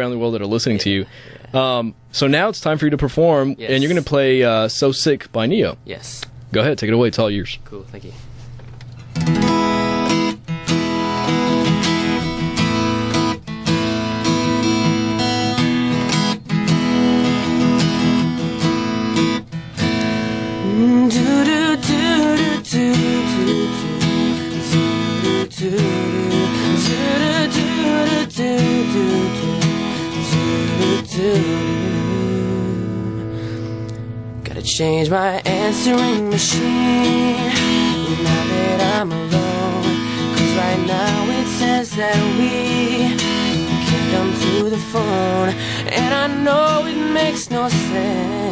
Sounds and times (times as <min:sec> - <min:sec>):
Music: 0:09.1 - 0:48.5
Male singing: 0:20.6 - 0:33.1, 0:34.5 - 0:48.5.